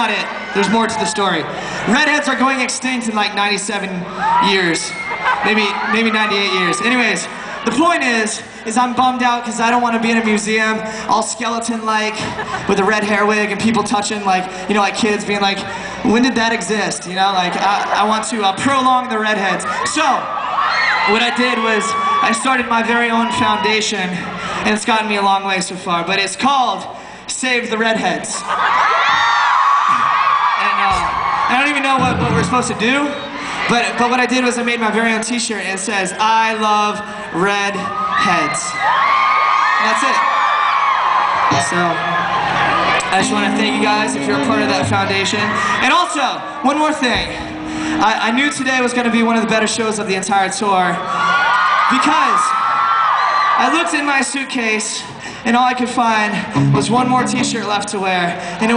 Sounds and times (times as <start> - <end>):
Male speech, man speaking: 0.0 - 20.3, 21.1 - 28.5, 30.6 - 38.8, 39.8 - 40.3, 41.5 - 42.1, 43.1 - 47.4, 48.0 - 51.0, 51.9 - 52.5, 53.6 - 58.7.